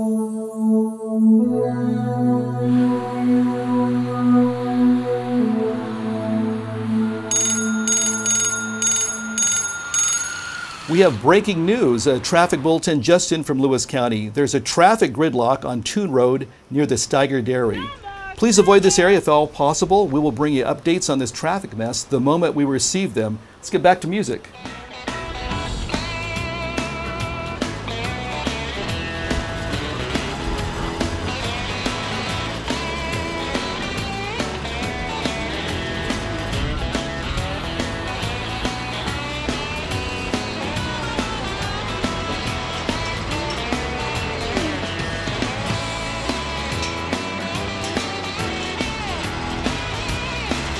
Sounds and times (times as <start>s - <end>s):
Speech: 10.9s - 24.5s.